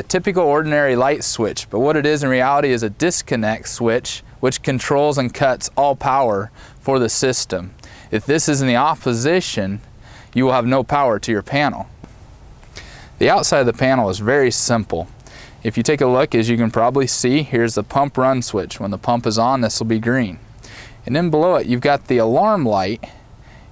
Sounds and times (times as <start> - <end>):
Speech: 0.0 - 11.9, 13.2 - 20.4, 21.0 - 23.2.